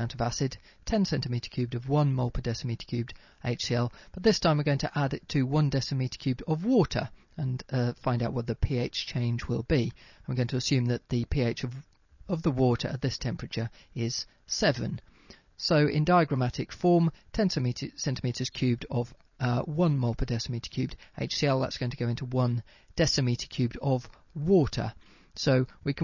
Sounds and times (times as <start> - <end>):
Speech: 0.0 - 15.0, 15.6 - 26.0.